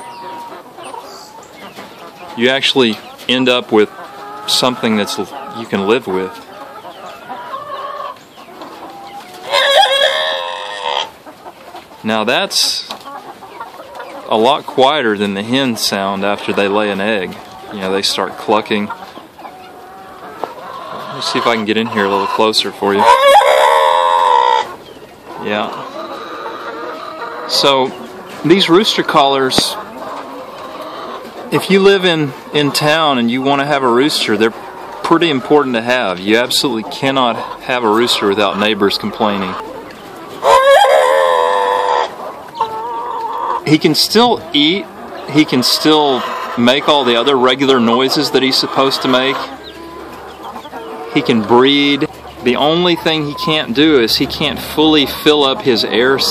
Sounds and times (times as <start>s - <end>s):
Cluck: 0.0s - 56.3s
Crowing, cock-a-doodle-doo: 9.5s - 10.5s.